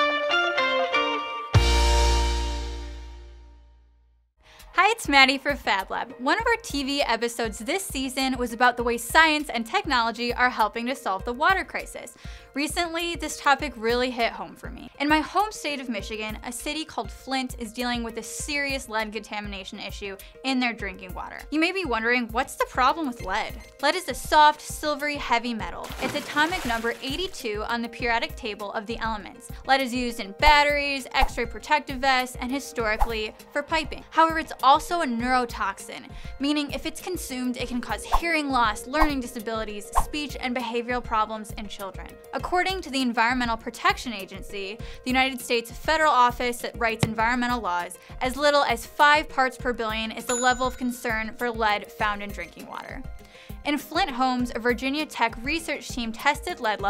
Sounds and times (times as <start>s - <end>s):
Music: 0.0s - 56.8s
Speech: 4.7s - 53.0s, 53.6s - 56.8s.